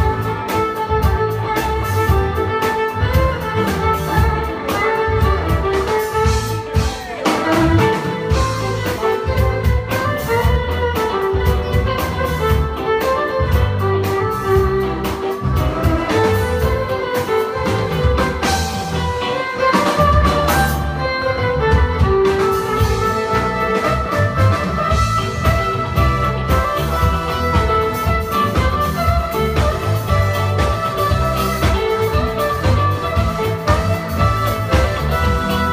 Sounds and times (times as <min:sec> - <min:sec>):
Violin, fiddle: 0:00.0 - 0:35.7.